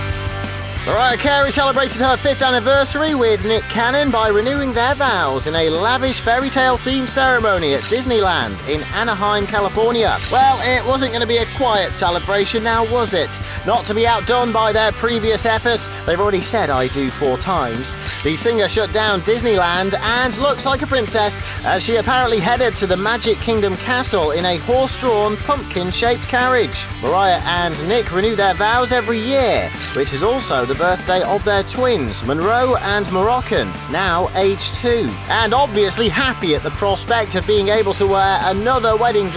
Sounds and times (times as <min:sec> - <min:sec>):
Music: 0:00.0 - 0:39.3
Speech: 0:00.8 - 0:39.3.